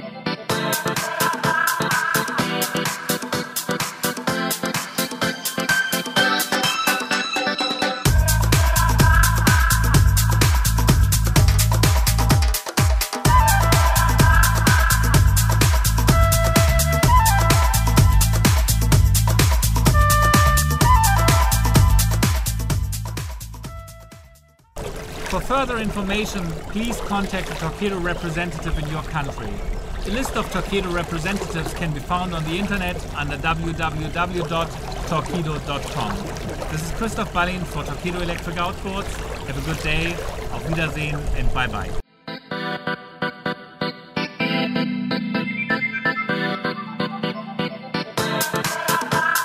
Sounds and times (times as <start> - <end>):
Boat, Water vehicle: 8.0 - 23.9, 24.7 - 42.0
Speech: 25.3 - 42.0.